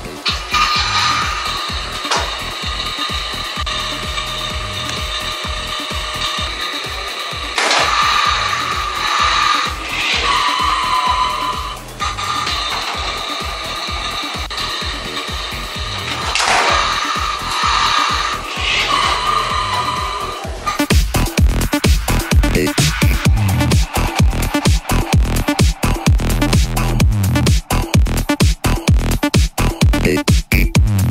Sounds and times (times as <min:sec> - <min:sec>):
Music: 0:00.0 - 0:31.1.